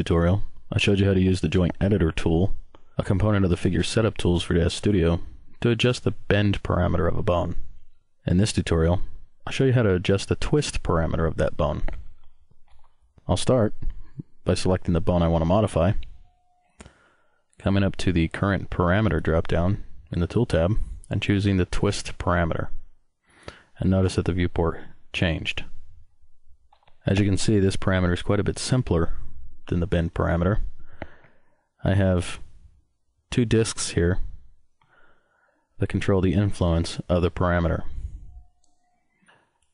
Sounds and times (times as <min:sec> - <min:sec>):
Speech: 0:00.0 - 0:12.0, 0:13.2 - 0:16.1, 0:17.6 - 0:22.8, 0:23.8 - 0:25.8, 0:27.0 - 0:30.7, 0:31.8 - 0:32.5, 0:33.3 - 0:34.4, 0:35.8 - 0:38.0.